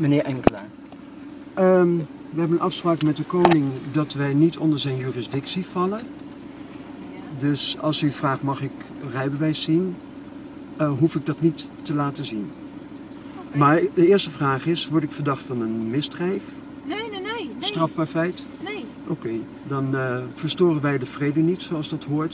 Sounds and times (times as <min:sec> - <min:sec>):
Car: 0:00.0 - 0:22.3
Speech: 0:01.6 - 0:06.1, 0:07.2 - 0:10.0, 0:10.8 - 0:12.5, 0:13.4 - 0:22.3.